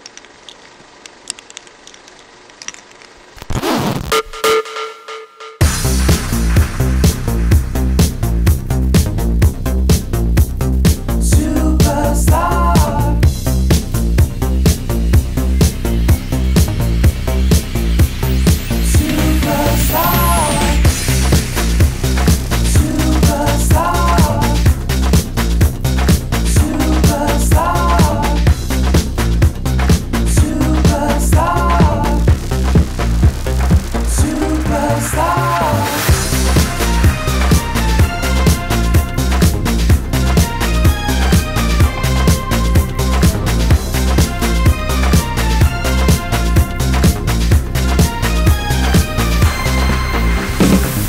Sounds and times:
Music: 3.6s - 51.0s.

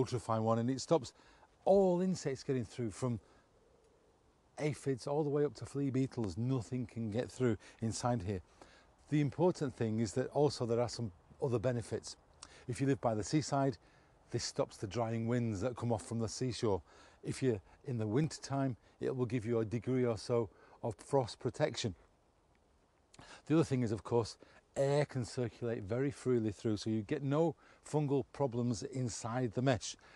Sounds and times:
Speech: 0.0s - 3.2s, 4.6s - 8.4s, 9.0s - 22.0s, 23.4s - 30.0s.

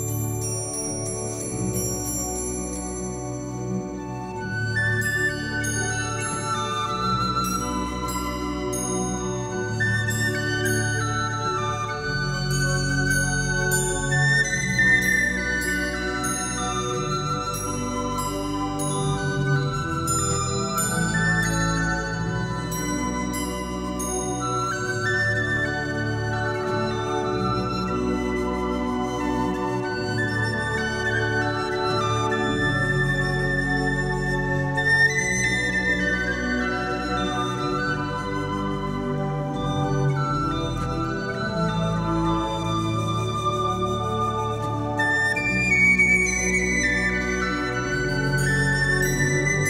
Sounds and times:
Flute: 0.0s - 49.7s.

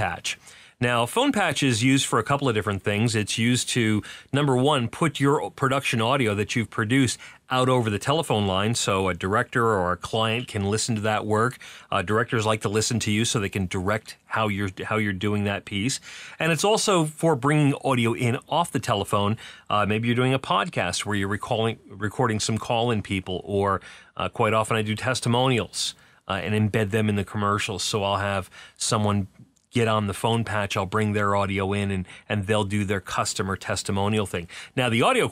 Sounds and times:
Speech: 0.0s - 35.3s.

